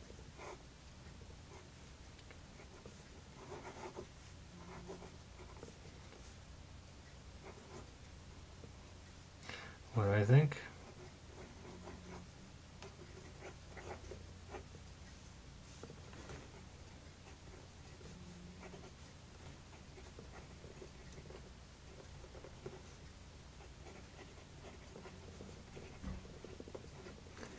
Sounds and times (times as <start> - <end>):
Inside, small room: 0.0 - 27.5.